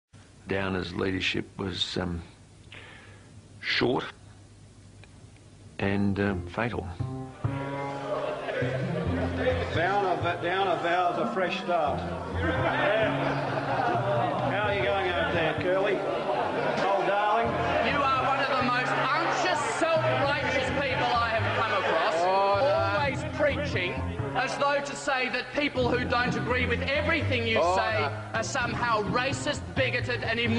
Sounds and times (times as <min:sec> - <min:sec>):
Speech: 0:00.5 - 0:02.3, 0:03.6 - 0:04.2, 0:05.8 - 0:07.0
Music: 0:05.8 - 0:30.5.